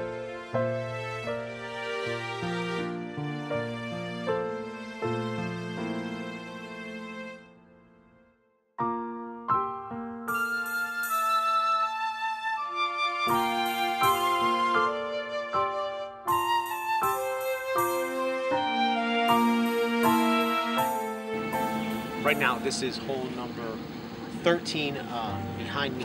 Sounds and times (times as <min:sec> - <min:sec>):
Music: 0:00.0 - 0:23.6, 0:25.1 - 0:26.0.